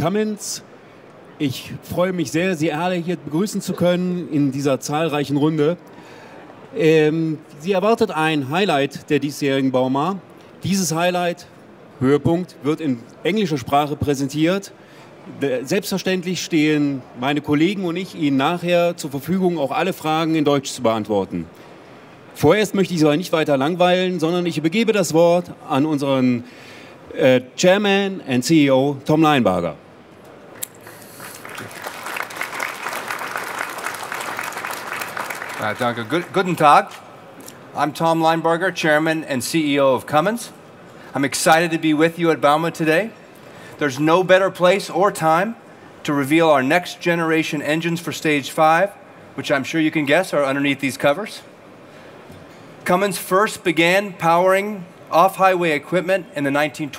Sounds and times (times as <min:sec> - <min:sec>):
Speech: 0:00.0 - 0:00.6, 0:01.4 - 0:05.8, 0:06.8 - 0:14.7, 0:15.3 - 0:21.5, 0:22.4 - 0:26.5, 0:27.1 - 0:29.8, 0:35.6 - 0:37.0, 0:37.8 - 0:43.2, 0:43.8 - 0:51.5, 0:52.8 - 0:56.9.